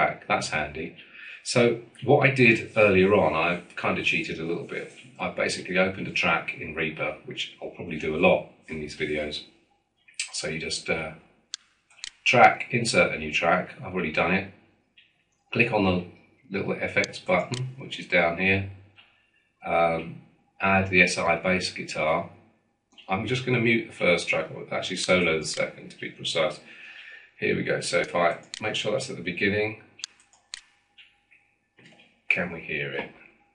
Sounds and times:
Speech: 0:00.0 - 0:09.4, 0:10.2 - 0:11.2, 0:12.1 - 0:14.5, 0:15.6 - 0:18.8, 0:19.6 - 0:22.3, 0:23.1 - 0:29.8, 0:32.3 - 0:33.2.

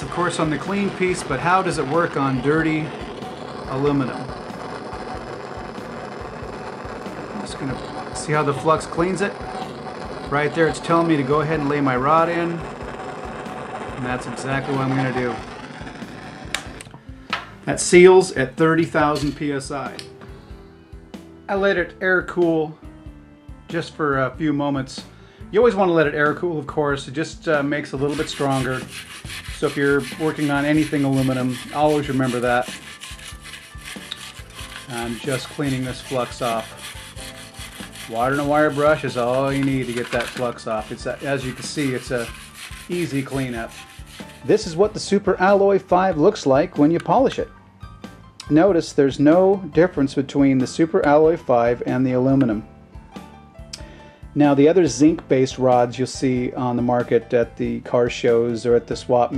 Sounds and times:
Speech: 0:00.0 - 0:02.9, 0:03.7 - 0:04.3, 0:07.4 - 0:09.4, 0:10.3 - 0:12.7, 0:14.0 - 0:15.4, 0:17.6 - 0:20.0, 0:21.5 - 0:22.8, 0:23.7 - 0:28.9, 0:29.6 - 0:32.8, 0:34.9 - 0:36.7, 0:38.1 - 0:42.3, 0:42.9 - 0:43.8, 0:44.5 - 0:47.5, 0:48.4 - 0:52.7, 0:54.4 - 0:59.3
Music: 0:00.0 - 0:59.3.

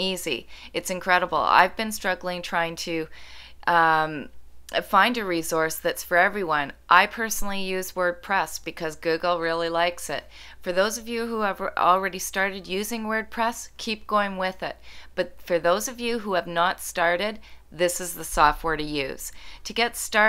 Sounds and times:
Speech: 0:00.0 - 0:03.1, 0:03.7 - 0:20.2.

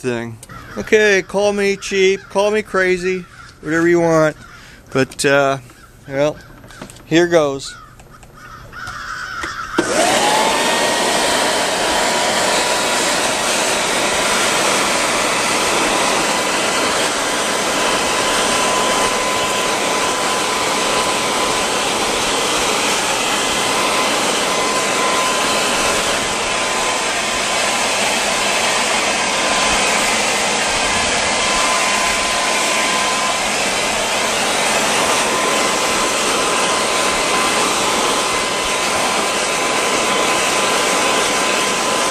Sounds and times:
Vacuum cleaner: 0:09.4 - 0:42.1.

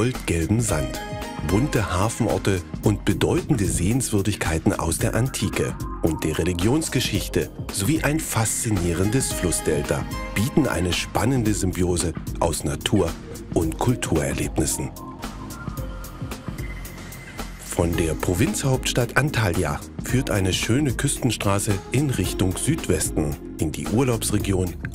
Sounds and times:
Speech: 0:00.0 - 0:15.0, 0:17.7 - 0:24.9
Music: 0:00.0 - 0:24.9.

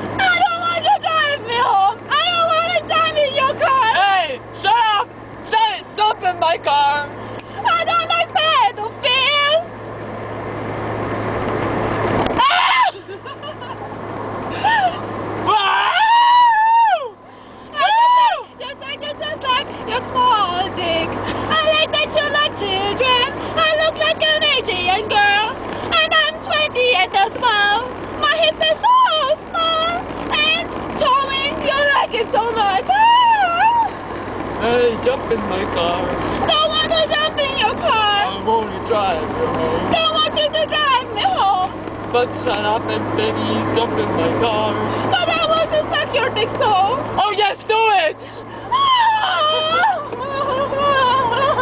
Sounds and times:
Car: 0:00.0 - 0:51.6.

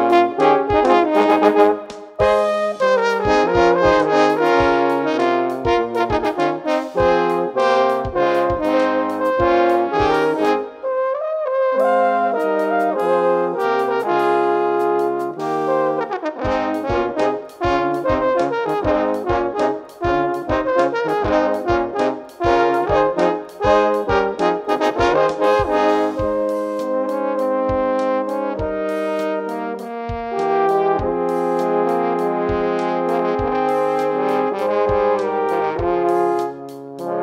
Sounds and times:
Trombone: 0:00.0 - 0:37.2.

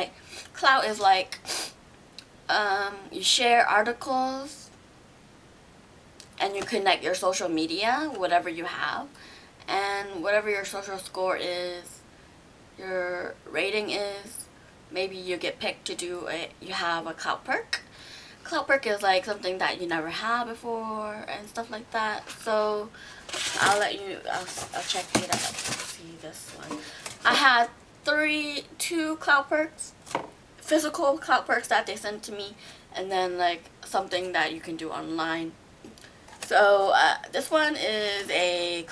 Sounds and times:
Speech: 0:00.0 - 0:01.4, 0:02.5 - 0:04.7, 0:06.4 - 0:12.0, 0:12.8 - 0:17.8, 0:18.4 - 0:30.0, 0:30.6 - 0:35.6, 0:36.4 - 0:38.9.

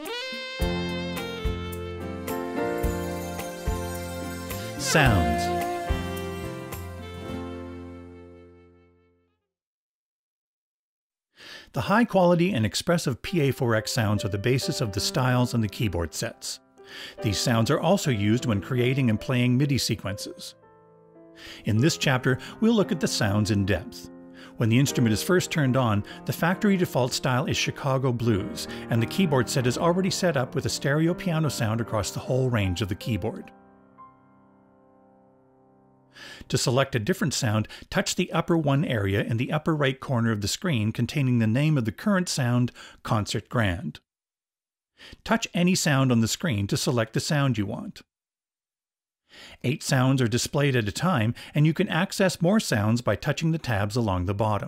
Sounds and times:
Music: 0:00.0 - 0:09.5, 0:13.2 - 0:36.3
Speech: 0:04.8 - 0:05.6, 0:11.7 - 0:16.6, 0:17.2 - 0:20.6, 0:21.6 - 0:33.5, 0:36.5 - 0:44.0, 0:45.2 - 0:48.1, 0:49.6 - 0:54.6.

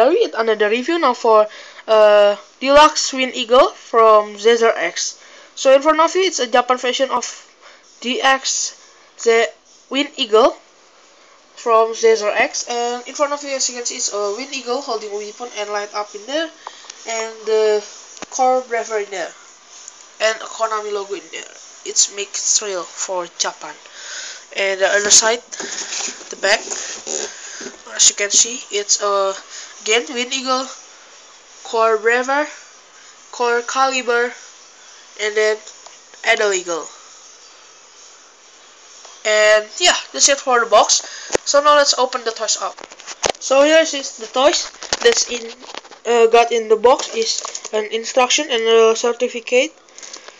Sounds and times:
Speech: 0:00.0 - 0:07.4, 0:08.0 - 0:10.6, 0:11.6 - 0:19.4, 0:20.2 - 0:23.8, 0:24.6 - 0:25.5, 0:26.3 - 0:26.8, 0:27.9 - 0:30.8, 0:31.7 - 0:32.6, 0:33.3 - 0:34.4, 0:35.2 - 0:37.0, 0:39.2 - 0:42.8, 0:43.4 - 0:49.8.

